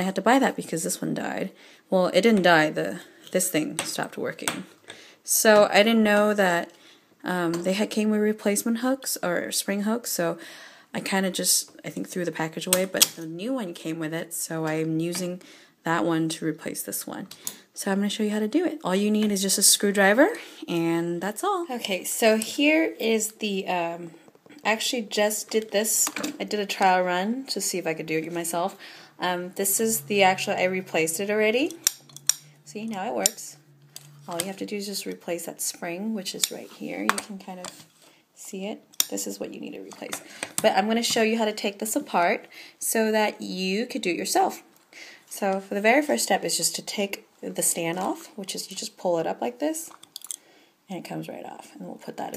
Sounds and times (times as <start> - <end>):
Speech: 0.0 - 4.7, 5.3 - 31.8, 32.7 - 33.6, 34.3 - 37.8, 38.4 - 44.7, 45.3 - 49.9, 50.9 - 52.3.